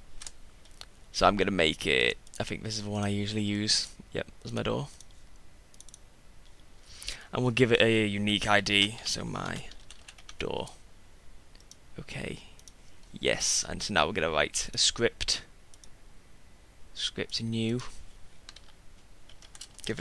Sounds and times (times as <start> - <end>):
Speech: 1.2 - 5.0, 7.3 - 9.8, 10.4 - 10.8, 12.0 - 12.5, 13.2 - 15.5, 17.0 - 18.0.